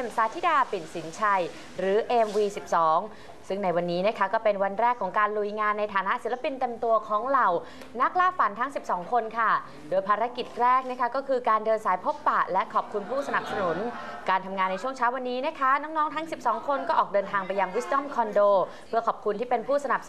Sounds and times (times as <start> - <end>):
Speech: 0.0 - 20.0.